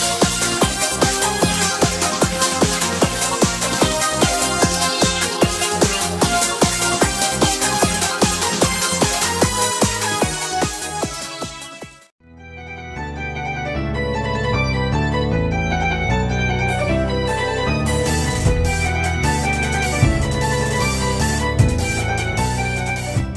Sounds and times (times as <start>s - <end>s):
Music: 0.0s - 23.3s.